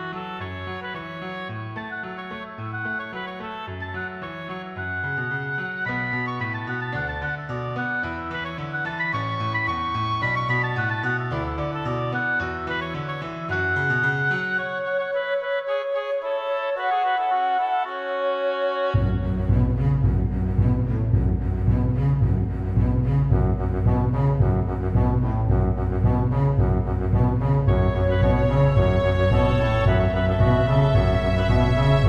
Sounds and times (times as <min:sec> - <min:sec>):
Music: 0:00.0 - 0:32.0.